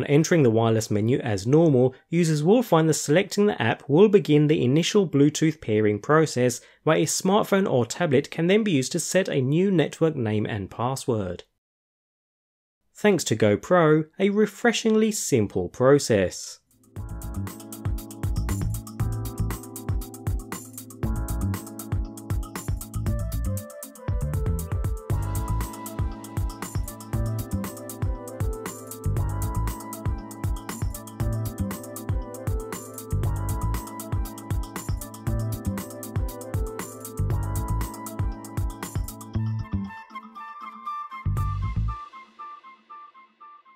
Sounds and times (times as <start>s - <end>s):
Speech: 0.0s - 11.5s, 13.0s - 16.6s.